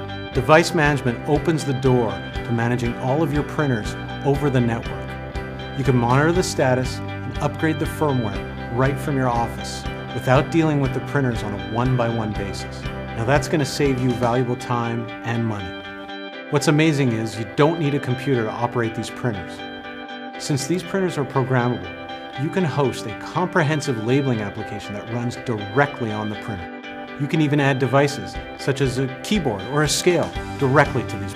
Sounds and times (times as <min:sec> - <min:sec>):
Music: 0:00.0 - 0:31.3
Speech: 0:00.4 - 0:05.1, 0:05.8 - 0:15.8, 0:16.5 - 0:19.6, 0:20.4 - 0:31.3.